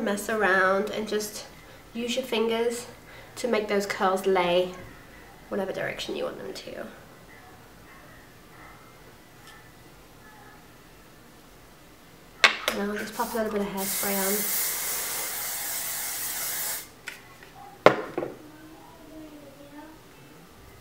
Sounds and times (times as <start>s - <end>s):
Inside, small room: 0.0s - 20.8s
Speech: 12.7s - 14.5s.